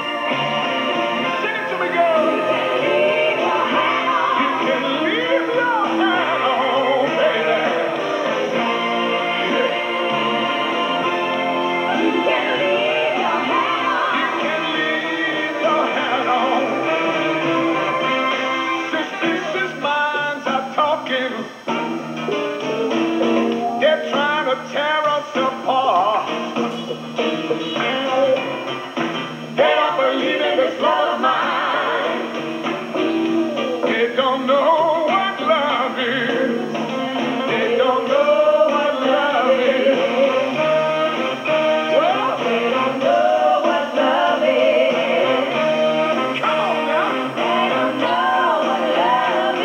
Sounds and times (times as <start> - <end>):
Inside, large room or hall: 0.0 - 49.6
Music: 0.0 - 49.6
Male singing: 1.3 - 8.4, 13.5 - 17.0, 18.9 - 21.6, 23.8 - 26.8, 27.7 - 28.6, 29.6 - 32.1, 33.8 - 36.6, 37.4 - 40.7, 41.8 - 44.1.